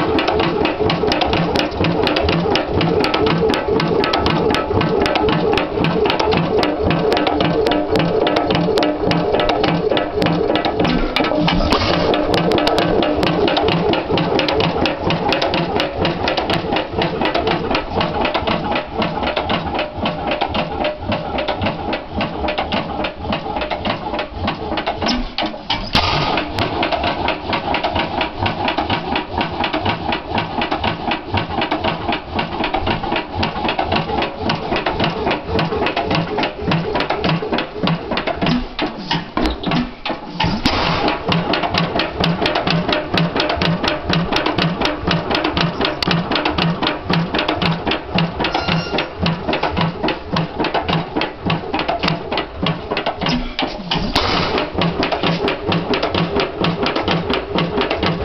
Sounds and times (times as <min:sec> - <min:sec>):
Medium engine (mid frequency): 0:00.0 - 0:48.6, 0:49.4 - 0:58.2.